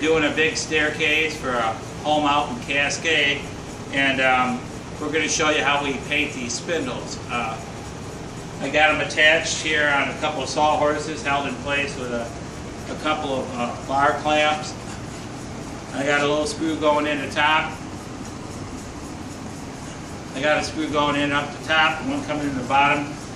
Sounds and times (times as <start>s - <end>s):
Speech: 0.0s - 7.7s, 8.6s - 14.8s, 15.9s - 17.8s, 20.4s - 23.2s.